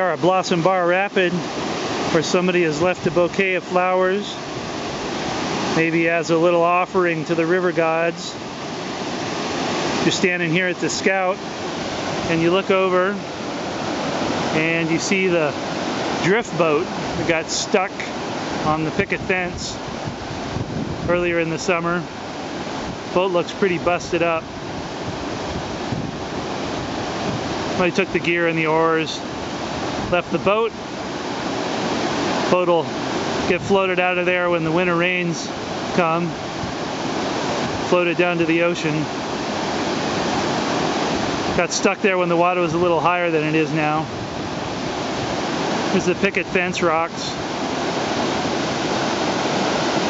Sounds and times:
Speech: 0.0s - 1.4s, 2.1s - 4.4s, 5.7s - 8.4s, 10.0s - 11.4s, 12.3s - 13.2s, 14.5s - 15.6s, 16.2s - 19.8s, 21.1s - 22.1s, 23.1s - 24.4s, 27.8s - 29.2s, 30.1s - 30.8s, 32.5s - 32.9s, 33.5s - 36.4s, 37.9s - 39.1s, 41.6s - 44.1s, 45.9s - 47.4s
Sailboat, sailing ship: 0.0s - 50.0s.

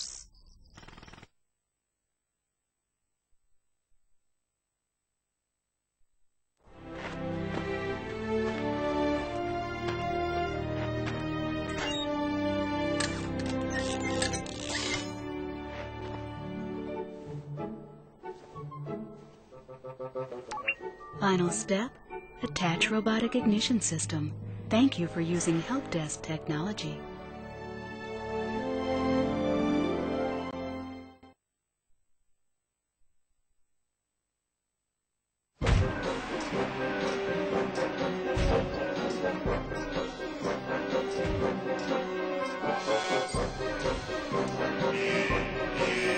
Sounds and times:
Music: 6.7s - 31.4s, 35.6s - 46.1s
Speech: 21.2s - 27.0s.

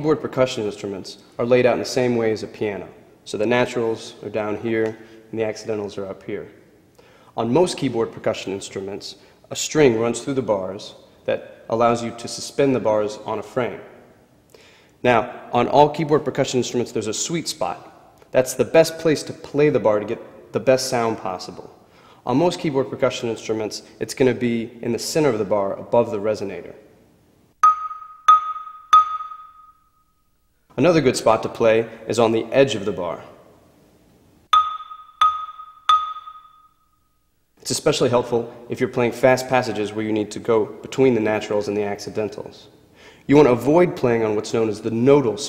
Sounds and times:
Speech: 0.0s - 6.6s, 7.4s - 13.9s, 15.0s - 26.8s, 30.8s - 33.4s, 37.6s - 42.7s, 43.3s - 45.4s.

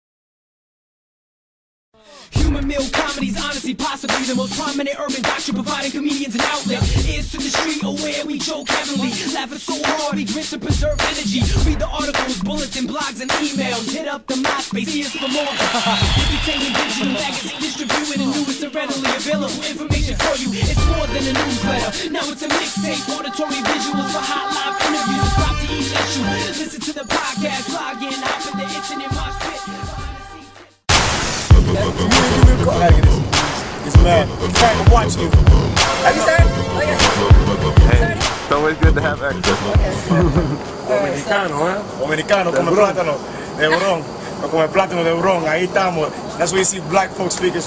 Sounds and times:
Singing: 2.0s - 30.8s, 31.6s - 40.4s
Music: 2.2s - 40.4s.

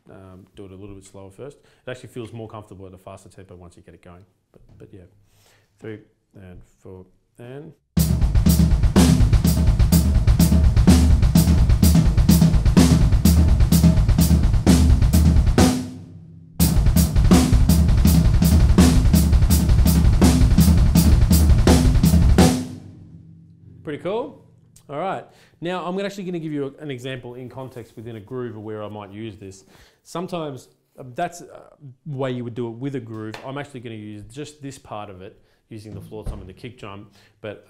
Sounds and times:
Speech: 0.0s - 5.2s, 5.8s - 7.8s, 23.8s - 37.7s
Snare drum: 8.0s - 23.0s
Bass drum: 8.0s - 24.9s, 35.9s - 36.7s
Drum kit: 8.0s - 25.0s, 35.8s - 36.8s.

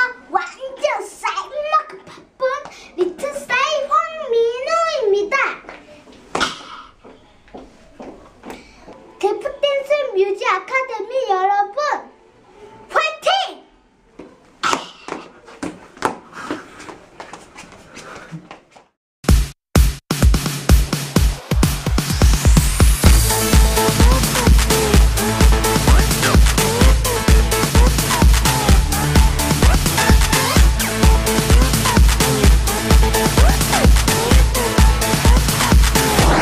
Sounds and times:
Dance music: 19.3s - 36.4s
Disco: 20.6s - 36.4s.

